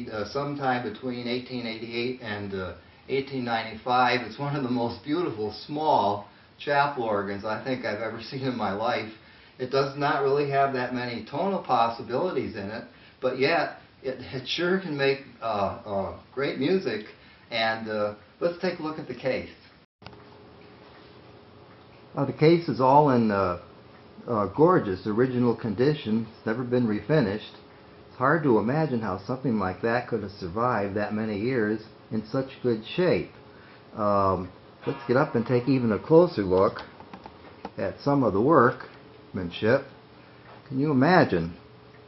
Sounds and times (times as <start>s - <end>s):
Speech: 0.0s - 19.7s, 22.2s - 27.6s, 28.2s - 36.9s, 37.8s - 40.0s, 40.7s - 41.6s.